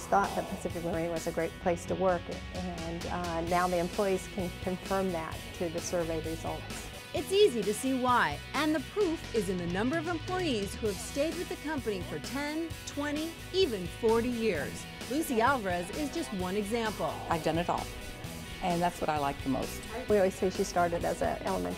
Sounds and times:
Speech: 0.0s - 17.9s, 18.6s - 21.7s
Music: 0.0s - 21.7s.

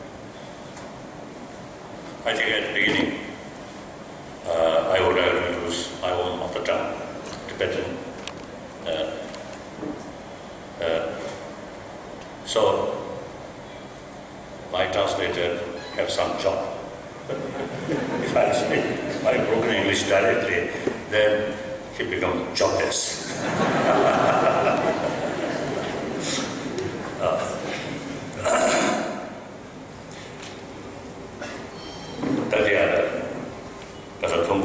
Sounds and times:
Narration, monologue: 2.1s - 29.5s, 32.2s - 34.6s
Male speech, man speaking: 2.2s - 3.3s, 4.5s - 8.0s, 8.9s - 9.3s, 10.8s - 11.4s, 12.4s - 13.2s, 14.7s - 16.8s, 18.2s - 23.3s, 27.2s - 27.6s, 32.5s - 33.4s, 34.2s - 34.6s.

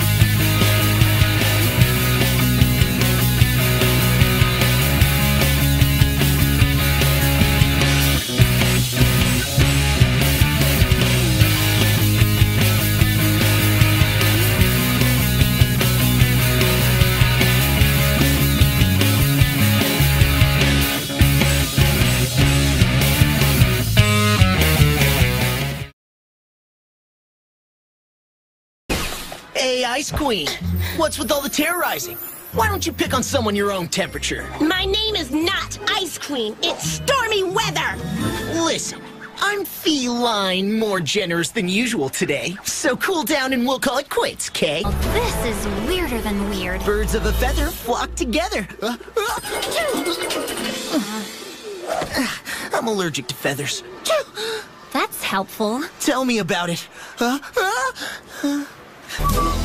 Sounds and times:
Music: 0.0s - 25.9s, 30.6s - 39.7s, 44.8s - 48.6s, 49.5s - 52.0s, 59.2s - 59.6s
Speech: 29.5s - 49.0s.

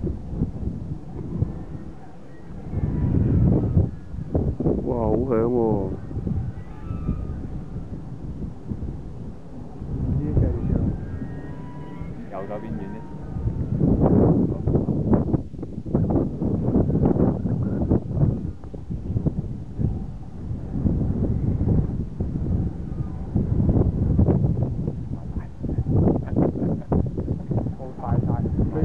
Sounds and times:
Wind noise (microphone): 0.0s - 28.8s.

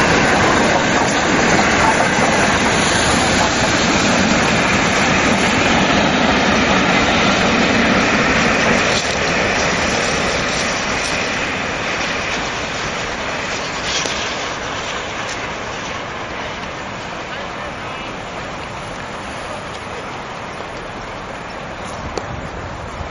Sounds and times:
Train: 0.0s - 23.1s
Speech: 17.2s - 18.4s.

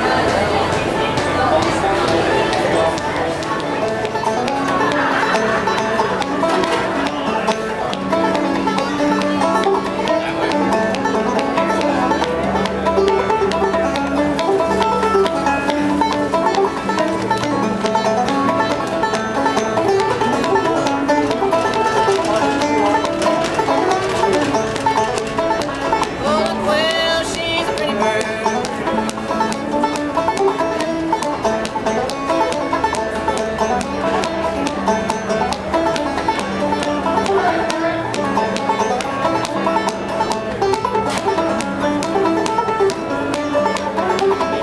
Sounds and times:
Music: 0.0s - 44.6s.

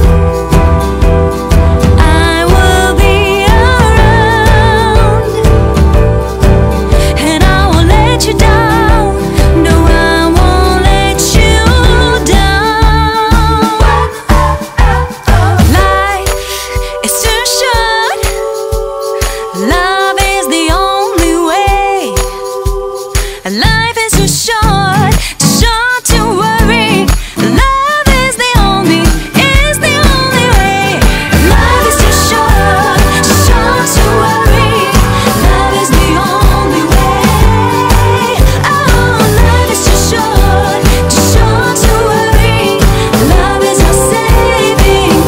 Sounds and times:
Happy music: 0.0s - 45.2s.

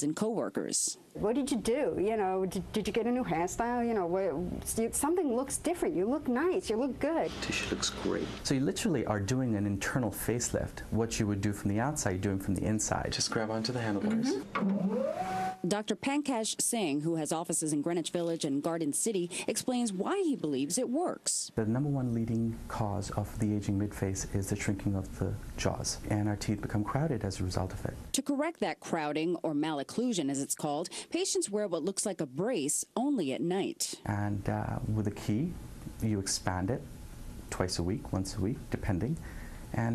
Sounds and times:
Speech: 0.0s - 14.4s, 15.7s - 36.9s
Inside, small room: 0.0s - 39.9s.

